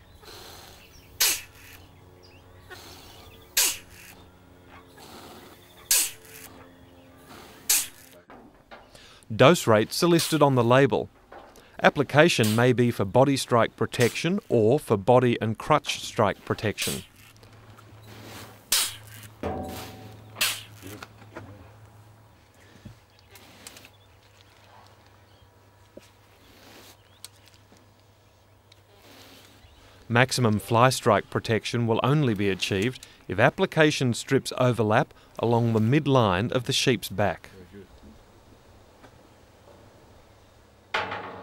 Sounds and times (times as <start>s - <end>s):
Animal: 0.2s - 1.9s, 2.6s - 8.2s
Speech: 9.3s - 11.1s, 11.8s - 17.1s, 30.1s - 38.2s.